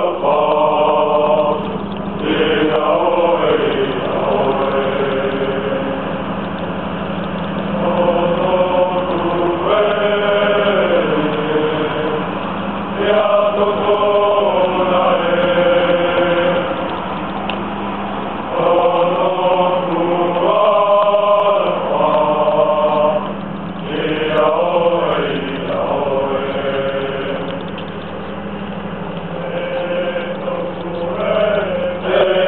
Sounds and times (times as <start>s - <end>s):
Singing: 0.0s - 6.6s, 7.6s - 17.2s, 18.4s - 27.8s, 29.3s - 32.4s
Outside, urban or manmade: 0.0s - 32.4s.